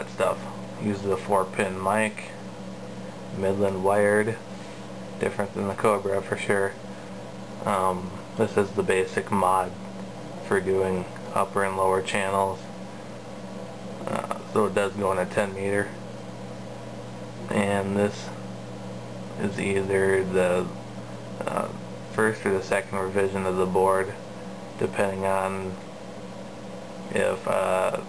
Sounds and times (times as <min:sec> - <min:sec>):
Speech: 0:00.0 - 0:02.4, 0:03.3 - 0:04.5, 0:05.2 - 0:06.8, 0:07.6 - 0:09.8, 0:10.4 - 0:12.7, 0:14.0 - 0:16.0, 0:17.4 - 0:18.4, 0:19.4 - 0:20.8, 0:21.4 - 0:24.2, 0:24.8 - 0:25.8, 0:27.1 - 0:28.0.